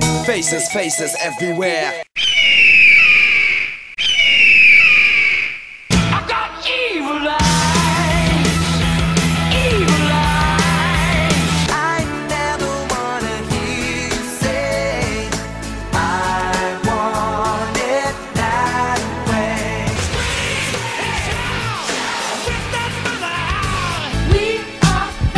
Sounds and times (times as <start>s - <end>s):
Music: 0.0s - 2.1s, 7.4s - 25.3s.